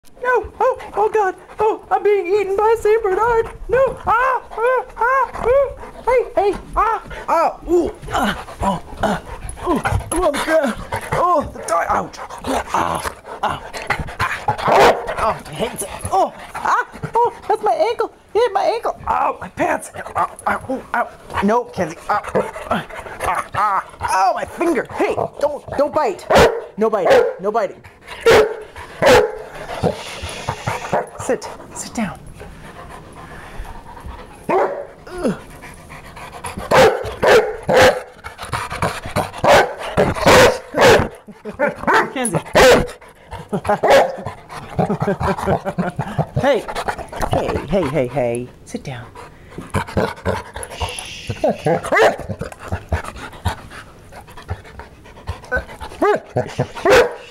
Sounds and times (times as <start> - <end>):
Speech: 0.2 - 13.6, 15.2 - 27.8, 42.0 - 42.5, 46.4 - 49.1
Dog: 8.1 - 17.6, 24.9 - 27.5, 28.2 - 31.3, 34.0 - 35.0, 36.1 - 48.5, 49.2 - 57.3.